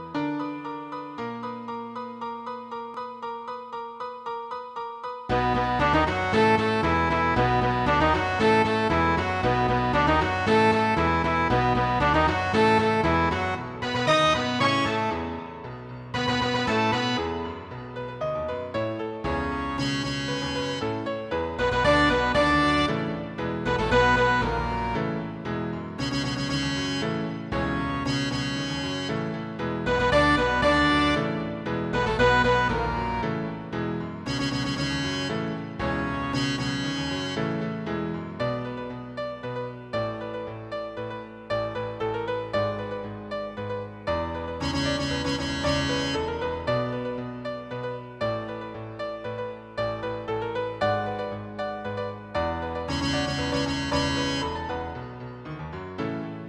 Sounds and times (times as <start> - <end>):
Background music: 0.0 - 56.4
Video game music: 0.0 - 56.4
Theme music: 5.3 - 18.8, 19.6 - 37.7, 51.0 - 55.4.